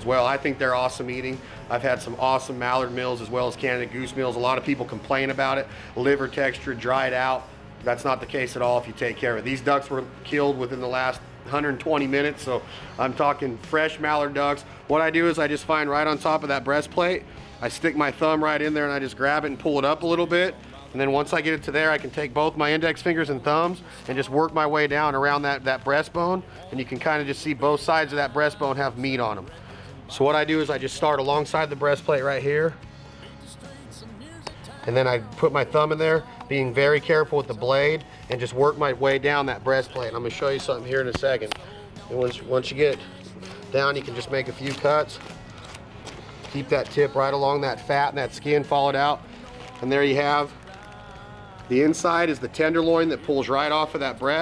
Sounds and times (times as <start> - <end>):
Speech: 0.0 - 32.8, 34.7 - 43.1, 43.7 - 45.2, 46.5 - 49.2, 49.8 - 50.5, 51.7 - 54.4
Music: 0.0 - 54.4.